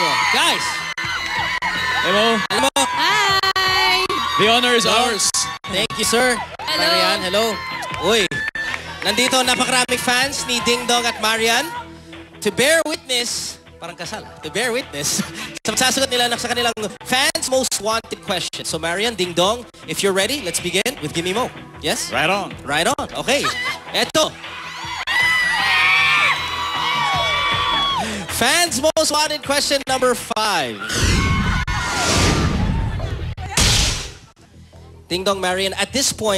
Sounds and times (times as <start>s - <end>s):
Music: 0.0s - 36.3s.